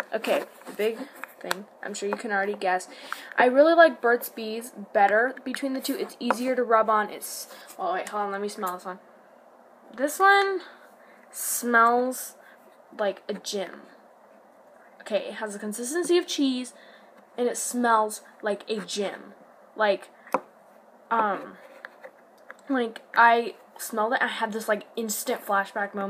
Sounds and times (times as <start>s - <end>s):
Speech: 0.0s - 9.0s, 10.0s - 10.8s, 11.4s - 12.4s, 13.0s - 14.0s, 15.0s - 16.8s, 17.4s - 20.1s, 21.1s - 21.6s, 22.6s - 26.1s
Inside, small room: 0.0s - 26.1s.